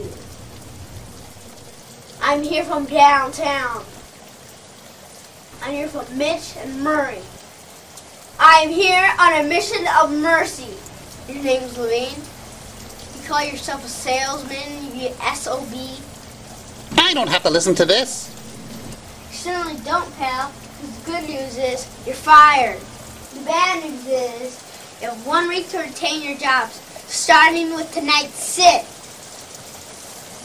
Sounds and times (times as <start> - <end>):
Narration, monologue: 0.0 - 4.2, 5.5 - 28.9.